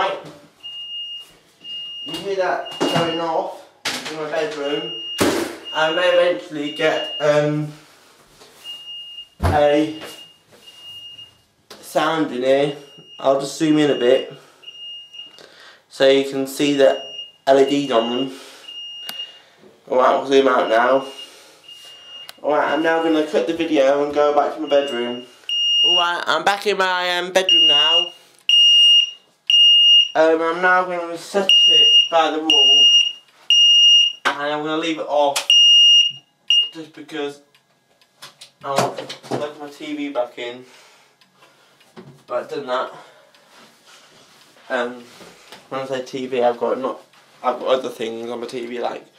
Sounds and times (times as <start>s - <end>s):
Smoke detector, smoke alarm: 0.6s - 3.3s, 4.8s - 7.4s, 8.6s - 11.4s, 13.9s - 15.4s, 17.0s - 19.4s, 20.6s - 23.3s, 24.6s - 26.2s, 27.4s - 30.2s, 31.5s - 34.3s, 35.5s - 36.8s
Fire alarm: 0.6s - 3.4s, 4.7s - 7.4s, 8.6s - 11.4s, 12.8s - 15.4s, 17.0s - 19.5s, 20.6s - 23.4s, 24.6s - 26.2s, 27.4s - 30.2s, 31.5s - 34.2s, 35.5s - 36.8s
Speech: 2.1s - 5.0s, 5.8s - 7.8s, 9.4s - 10.0s, 30.2s - 33.0s, 34.3s - 35.4s, 36.7s - 37.5s, 38.6s - 40.7s, 42.3s - 43.0s, 45.7s - 49.1s.